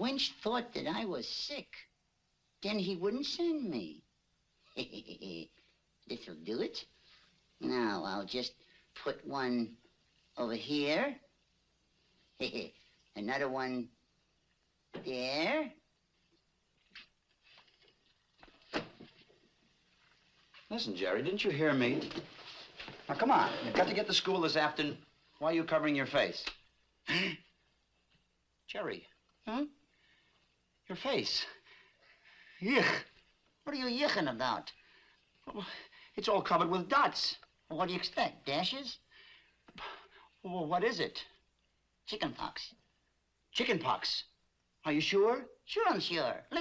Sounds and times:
Speech: 0.0 - 1.9, 2.6 - 4.0, 4.7 - 5.5, 6.1 - 6.9, 7.6 - 9.8, 10.4 - 11.3, 12.4 - 13.9, 15.0 - 15.8, 20.7 - 22.2, 23.1 - 27.4, 28.7 - 29.8, 30.9 - 31.6, 32.6 - 34.8, 35.4 - 39.0, 39.8 - 41.4, 42.0 - 42.8, 43.5 - 46.6.

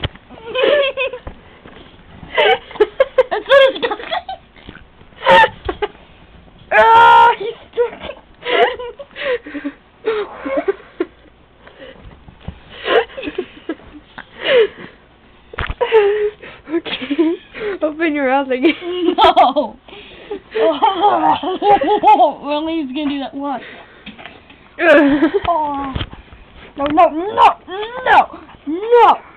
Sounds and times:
Speech: 22.3 - 23.7.

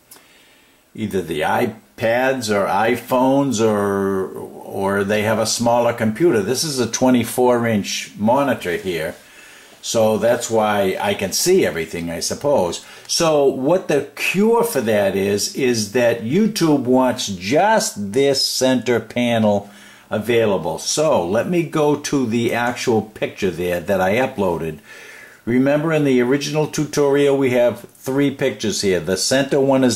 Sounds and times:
Speech: 1.0 - 9.2, 9.8 - 24.8, 25.4 - 29.9.

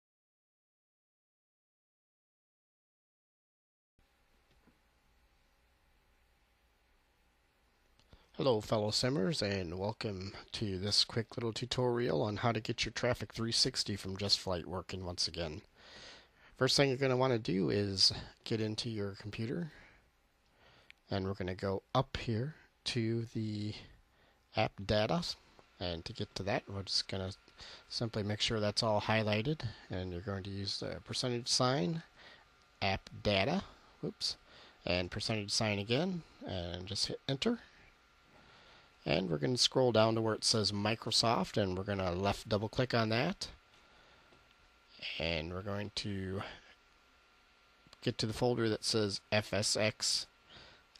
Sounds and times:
Speech: 8.4 - 15.7, 16.6 - 19.9, 21.0 - 32.1, 32.8 - 37.7, 39.0 - 43.6, 45.0 - 46.7, 48.0 - 50.3.

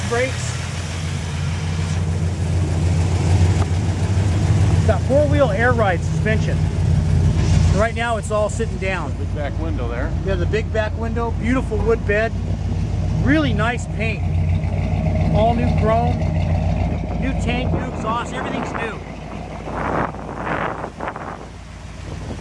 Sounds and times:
Speech: 0.0 - 0.6, 4.9 - 6.6, 7.7 - 12.4, 13.2 - 14.3, 15.3 - 16.2, 17.1 - 19.1.

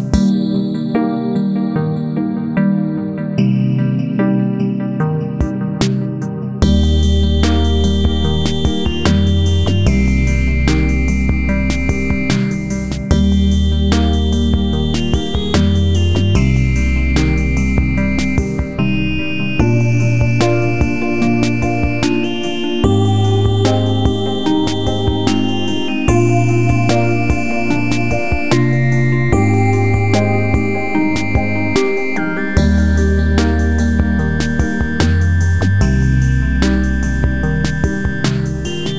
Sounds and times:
Music: 0.0 - 38.9.

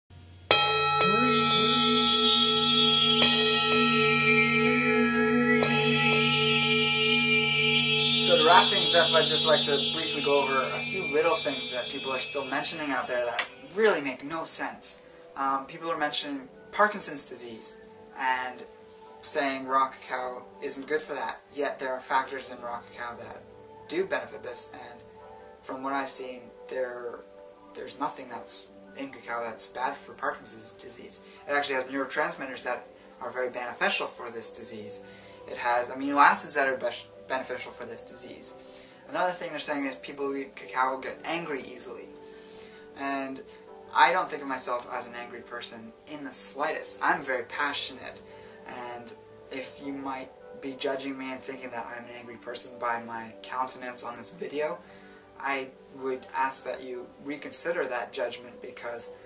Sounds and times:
Music: 0.1 - 59.2
Echo: 0.7 - 13.7
Speech: 8.2 - 25.0, 25.6 - 27.2, 27.8 - 42.1, 43.0 - 54.8, 55.4 - 59.1.

